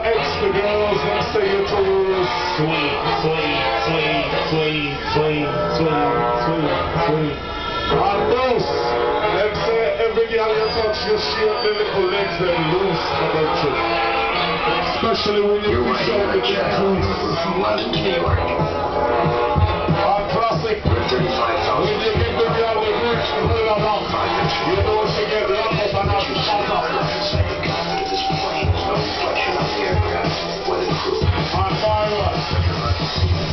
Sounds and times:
Speech: 0.0s - 13.8s, 14.6s - 18.7s, 19.9s - 30.0s, 31.2s - 33.0s
Music: 0.0s - 33.5s.

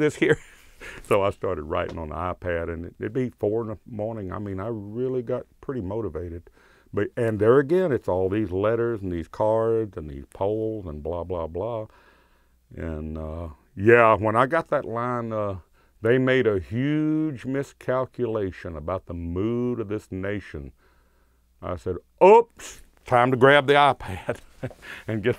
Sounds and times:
Speech: 0.0s - 0.4s, 1.0s - 11.9s, 12.7s - 20.8s, 21.6s - 24.4s, 25.1s - 25.3s.

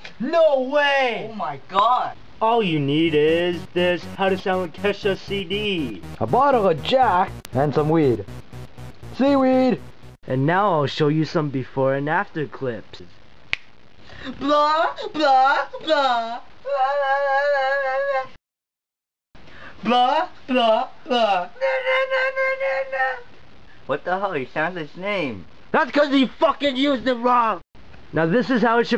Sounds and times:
Speech: 0.2s - 8.3s, 9.2s - 13.1s, 14.2s - 17.0s, 19.8s - 23.3s, 23.9s - 28.9s
Music: 3.1s - 10.3s.

